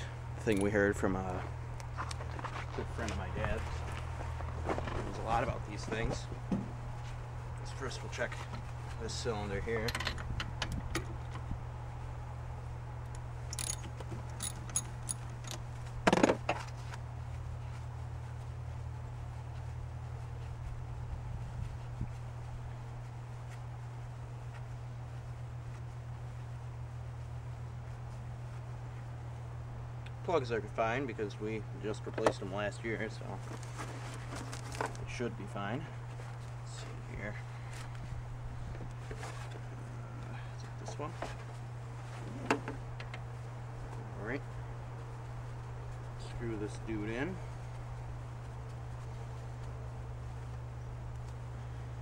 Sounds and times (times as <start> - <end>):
Speech: 0.4 - 1.5, 2.7 - 3.8, 5.0 - 6.3, 7.6 - 9.9, 30.2 - 33.4, 35.0 - 36.0, 36.7 - 37.4, 40.6 - 41.2, 44.1 - 44.5, 46.2 - 47.4.